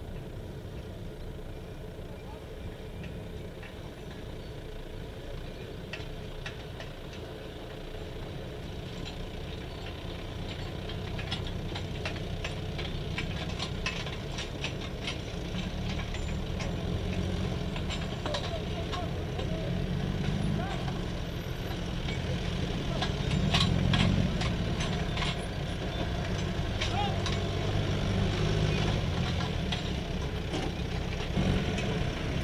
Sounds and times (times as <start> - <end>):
Speech: 2.1 - 2.9, 18.2 - 19.8, 20.4 - 21.0, 22.8 - 23.3, 26.8 - 27.4.